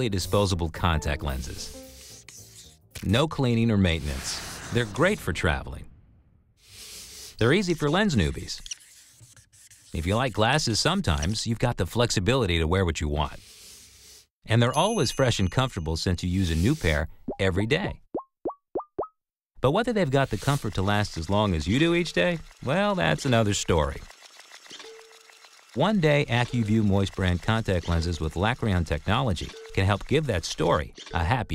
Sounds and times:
Speech: 0:00.0 - 0:01.8, 0:03.0 - 0:05.9, 0:07.4 - 0:08.6, 0:10.0 - 0:13.4, 0:14.5 - 0:18.0, 0:19.6 - 0:24.1, 0:25.8 - 0:31.5.

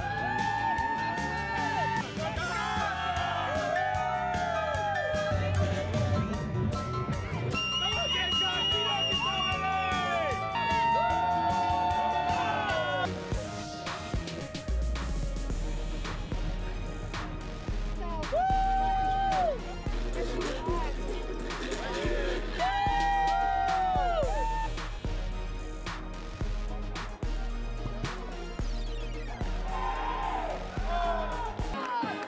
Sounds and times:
Music: 0:00.0 - 0:32.2.

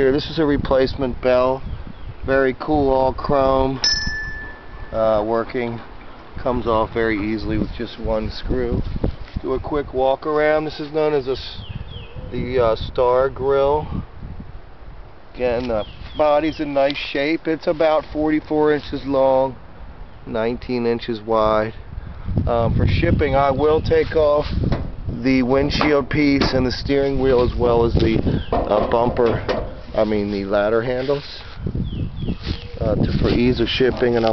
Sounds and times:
Speech: 0:00.0 - 0:01.6, 0:02.3 - 0:03.8, 0:04.9 - 0:08.8, 0:09.4 - 0:11.6, 0:12.3 - 0:14.0, 0:15.4 - 0:19.6, 0:20.3 - 0:21.8, 0:22.5 - 0:24.5, 0:25.2 - 0:31.4, 0:32.8 - 0:34.3.

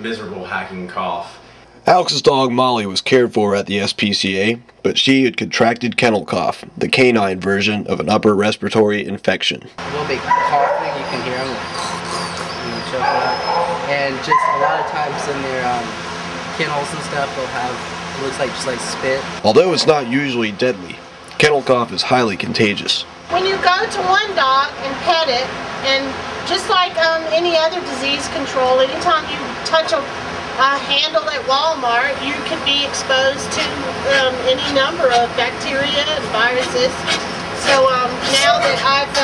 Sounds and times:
Speech: 0:00.0 - 0:11.7, 0:12.4 - 0:16.0, 0:16.6 - 0:39.2.

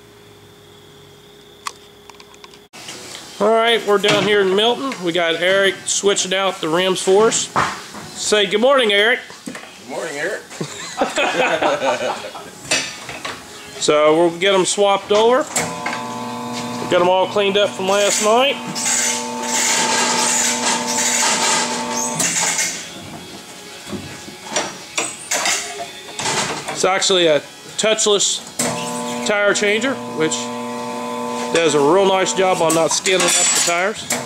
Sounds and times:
Speech: 0:03.4 - 0:07.5, 0:16.9 - 0:18.6, 0:31.5 - 0:34.0
Music: 0:22.6 - 0:28.6.

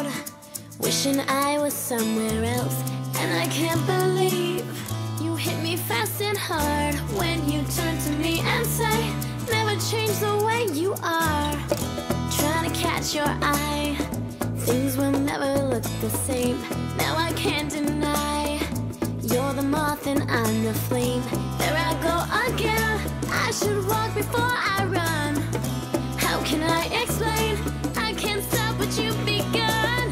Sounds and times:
Soul music: 0:00.0 - 0:30.1.

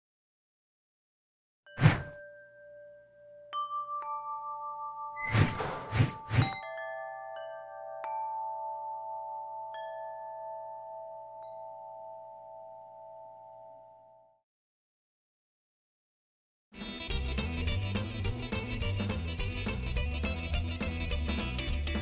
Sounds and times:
Glockenspiel: 0:01.7 - 0:14.4.

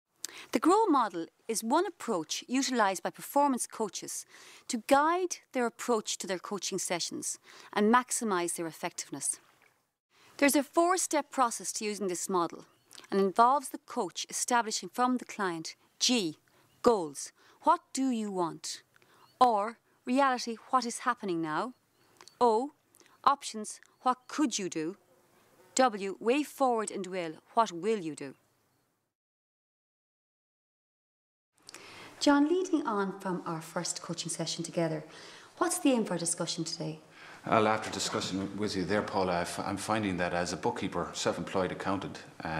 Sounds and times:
Speech: 0:00.5 - 0:09.4, 0:10.4 - 0:18.8, 0:19.4 - 0:21.7, 0:22.4 - 0:22.7, 0:23.3 - 0:25.0, 0:25.8 - 0:28.4, 0:32.2 - 0:42.5.

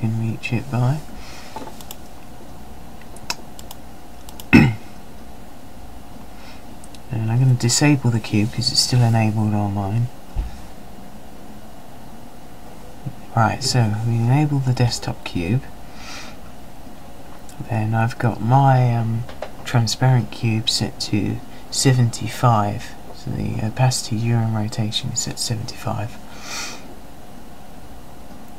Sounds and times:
Speech: 0:00.0 - 0:01.1, 0:07.1 - 0:10.1, 0:13.1 - 0:15.7, 0:17.5 - 0:26.2.

